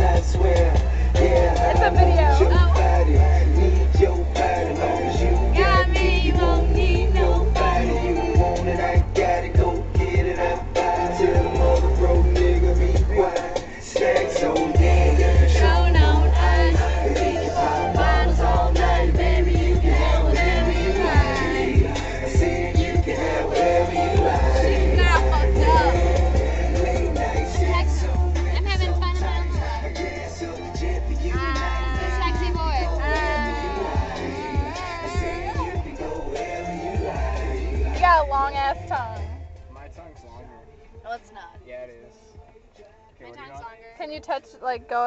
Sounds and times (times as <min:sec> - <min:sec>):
Music: 0:00.0 - 0:45.0.